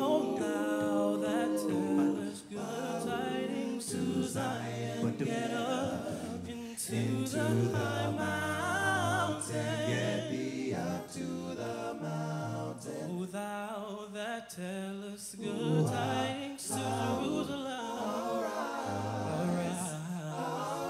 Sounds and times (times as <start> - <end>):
Choir: 0.0 - 20.9
Male singing: 13.1 - 17.9.